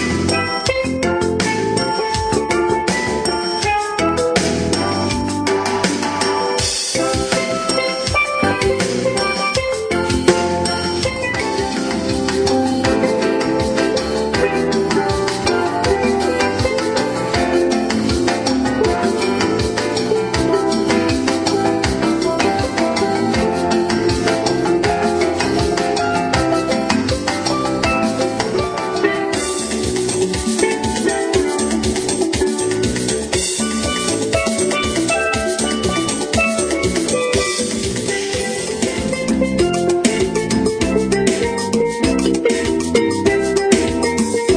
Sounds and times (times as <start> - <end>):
Musical instrument: 0.0 - 44.5.